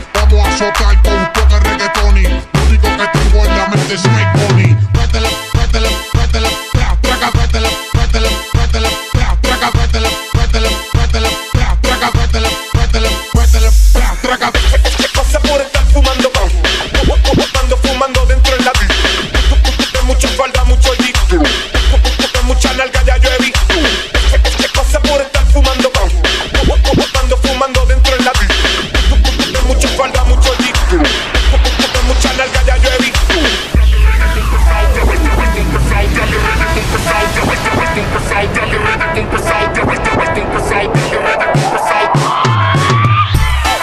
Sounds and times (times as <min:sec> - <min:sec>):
Electronic dance music: 0:00.0 - 0:43.8
Hip hop music: 0:00.0 - 0:43.8
Music of Latin America: 0:00.0 - 0:43.8.